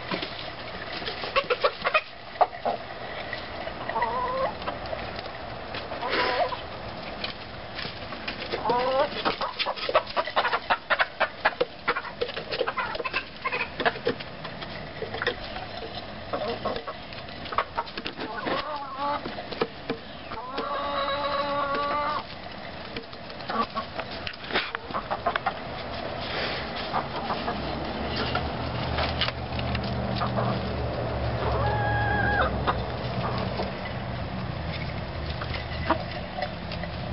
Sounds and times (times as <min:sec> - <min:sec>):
Cluck: 0:01.2 - 0:02.9, 0:03.8 - 0:04.8, 0:06.0 - 0:06.6, 0:08.5 - 0:14.2, 0:15.0 - 0:19.3, 0:20.3 - 0:22.3, 0:23.4 - 0:25.6, 0:26.8 - 0:28.4, 0:30.2 - 0:30.7, 0:31.4 - 0:33.8.